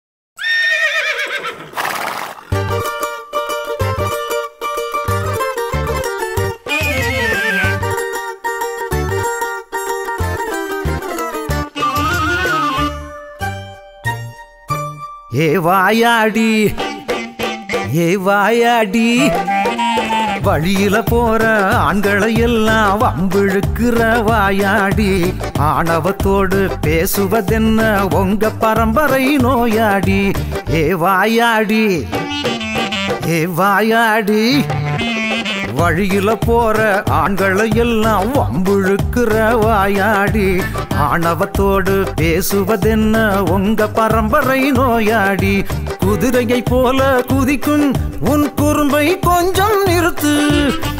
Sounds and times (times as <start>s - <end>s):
Neigh, whinny: 0.4s - 2.6s
Mandolin: 2.5s - 15.4s, 19.0s - 33.6s, 34.2s - 50.9s.